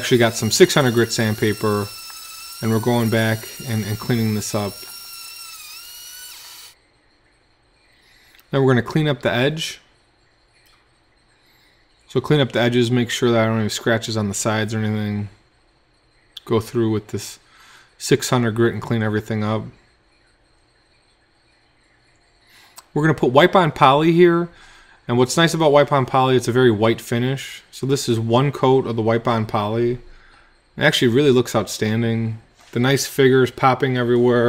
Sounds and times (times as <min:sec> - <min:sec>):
Speech: 0:00.0 - 0:01.9, 0:02.6 - 0:04.8, 0:08.5 - 0:09.9, 0:12.1 - 0:15.4, 0:16.4 - 0:17.4, 0:18.0 - 0:19.8, 0:23.0 - 0:24.5, 0:25.1 - 0:30.1, 0:30.8 - 0:34.4
Inside, small room: 0:00.0 - 0:34.4.